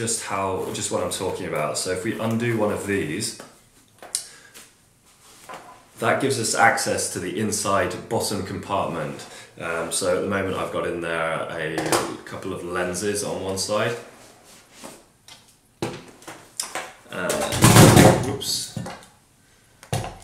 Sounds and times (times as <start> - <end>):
Speech: 0.0 - 3.5, 6.0 - 14.1, 17.1 - 18.9.